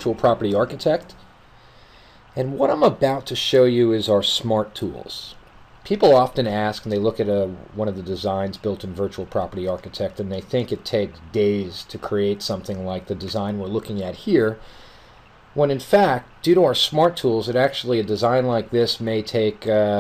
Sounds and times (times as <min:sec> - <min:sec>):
Speech: 0:00.0 - 0:01.2, 0:02.4 - 0:14.6, 0:15.6 - 0:20.0.